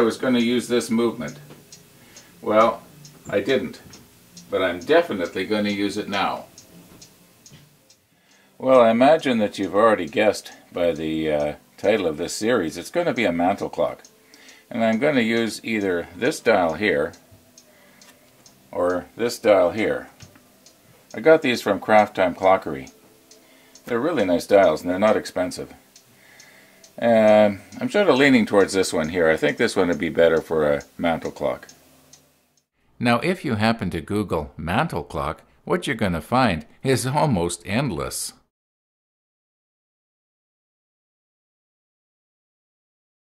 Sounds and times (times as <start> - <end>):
Speech: 0.0 - 1.5, 2.4 - 3.9, 4.5 - 6.5, 8.6 - 14.0, 14.7 - 17.2, 18.8 - 20.1, 21.2 - 22.9, 23.9 - 25.8, 27.0 - 31.7, 33.0 - 38.5
Tick-tock: 0.0 - 32.7.